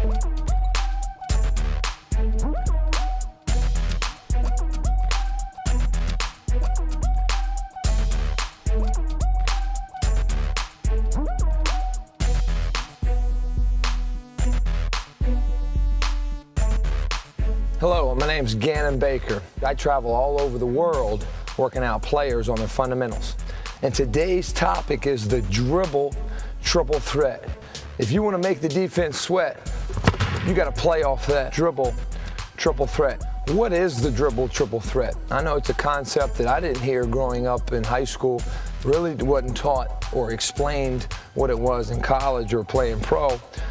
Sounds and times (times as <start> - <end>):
Music: 0.0 - 43.7
Speech: 17.8 - 29.6, 30.4 - 32.0, 32.6 - 43.4.